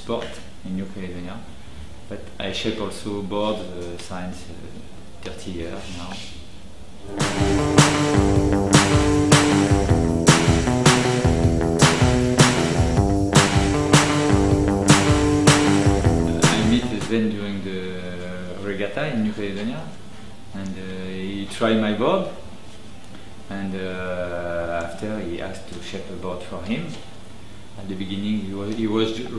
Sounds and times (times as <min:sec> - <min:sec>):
Speech: 0:00.0 - 0:01.5, 0:02.1 - 0:06.5, 0:16.3 - 0:22.4, 0:23.5 - 0:27.2, 0:27.8 - 0:29.3
Music: 0:07.0 - 0:17.6.